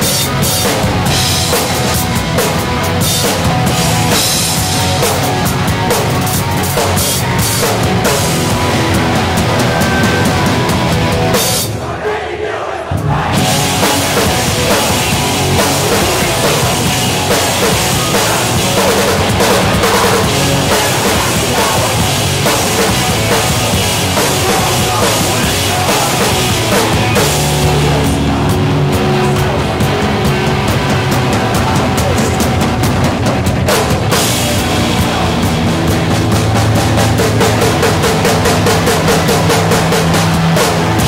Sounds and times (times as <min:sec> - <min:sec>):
Music: 0:00.0 - 0:41.0.